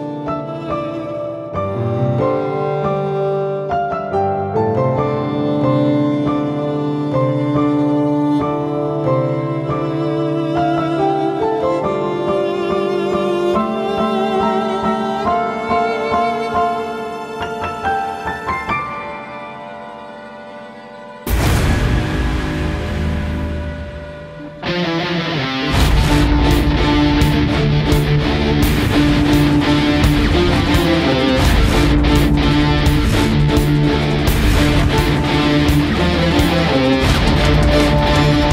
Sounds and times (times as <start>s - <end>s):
Violin, fiddle: 0.0s - 21.4s, 24.4s - 38.5s.